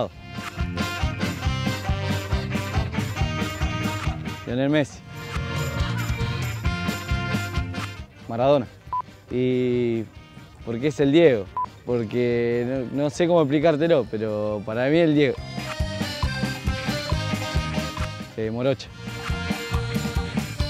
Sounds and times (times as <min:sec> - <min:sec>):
Music: 0:00.0 - 0:20.6
Speech: 0:04.5 - 0:05.0, 0:08.3 - 0:08.7, 0:09.3 - 0:10.1, 0:10.7 - 0:15.4, 0:18.4 - 0:18.9.